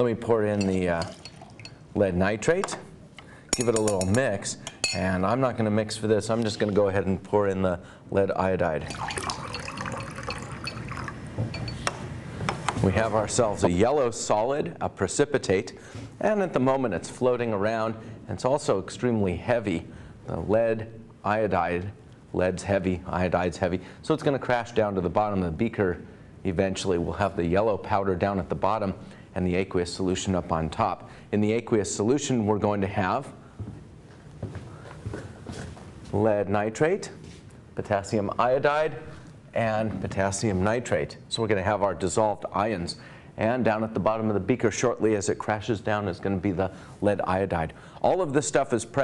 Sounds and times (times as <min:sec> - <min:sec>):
Speech: 0:00.0 - 0:01.2, 0:02.0 - 0:02.9, 0:03.6 - 0:08.9, 0:12.8 - 0:33.4, 0:36.1 - 0:37.2, 0:37.8 - 0:49.0.